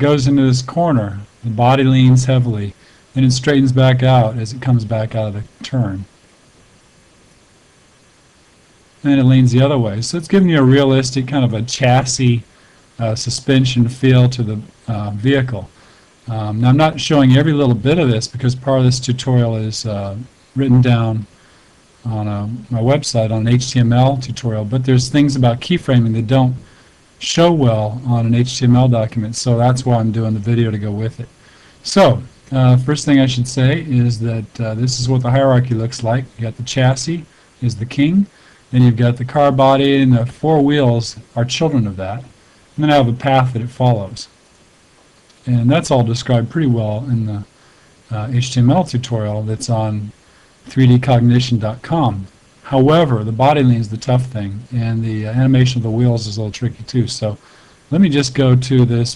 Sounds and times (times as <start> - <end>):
Speech: 0.0 - 6.1, 9.0 - 21.3, 22.0 - 44.4, 45.4 - 47.5, 48.1 - 59.1.